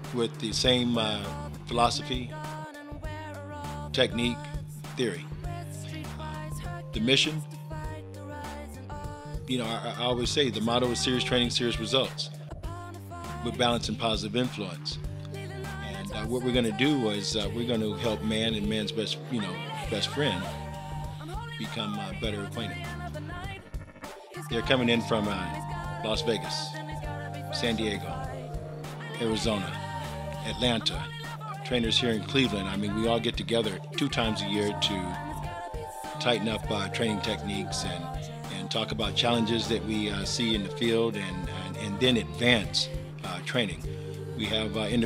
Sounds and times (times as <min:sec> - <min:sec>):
Speech: 0:00.0 - 0:02.3, 0:03.9 - 0:05.3, 0:06.9 - 0:07.5, 0:09.5 - 0:12.3, 0:13.4 - 0:15.0, 0:15.9 - 0:20.6, 0:21.4 - 0:23.0, 0:24.5 - 0:28.4, 0:29.2 - 0:29.8, 0:30.4 - 0:35.5, 0:36.2 - 0:43.8, 0:44.4 - 0:45.0.